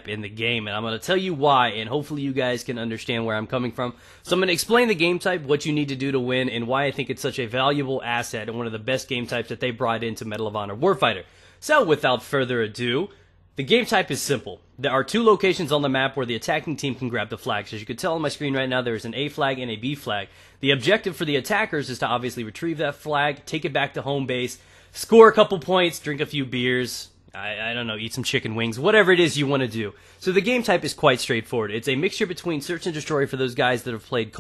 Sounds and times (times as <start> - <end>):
Speech: 0.0 - 34.4.